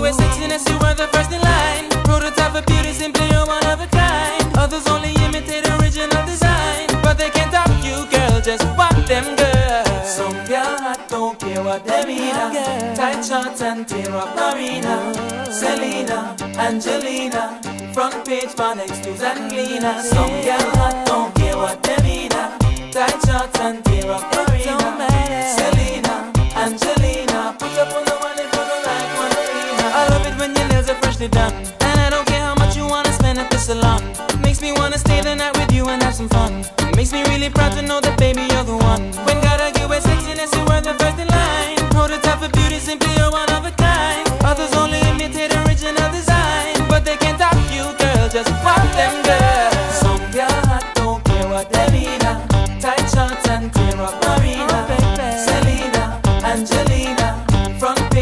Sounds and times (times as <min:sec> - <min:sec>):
Hip hop music: 0:00.0 - 0:58.2
Music of Africa: 0:00.0 - 0:58.2.